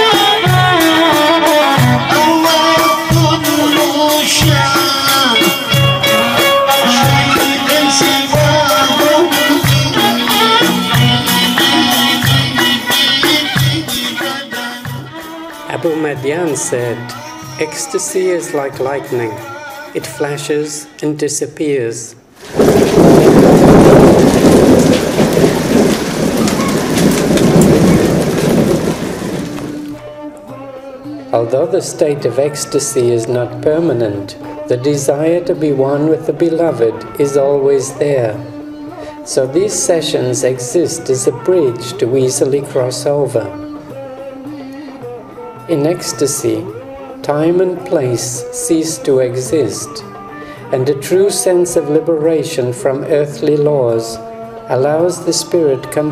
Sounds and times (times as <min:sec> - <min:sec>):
Raindrop: 0:22.4 - 0:30.0
Thunder: 0:22.4 - 0:30.0.